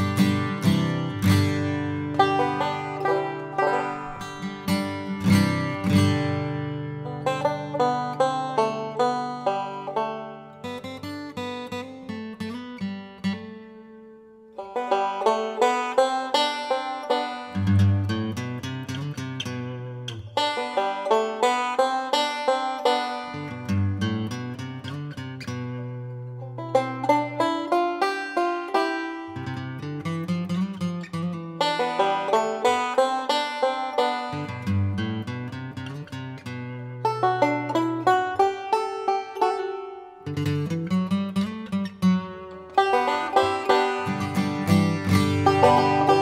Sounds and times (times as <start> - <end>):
Guitar: 0.0 - 46.2.